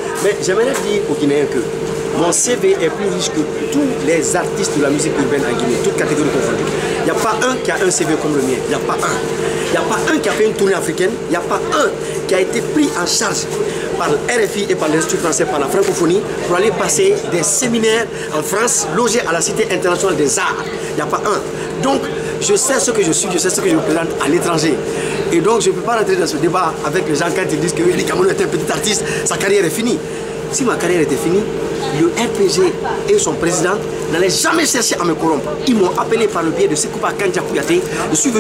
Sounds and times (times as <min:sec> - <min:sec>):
Speech: 0:00.0 - 0:38.4.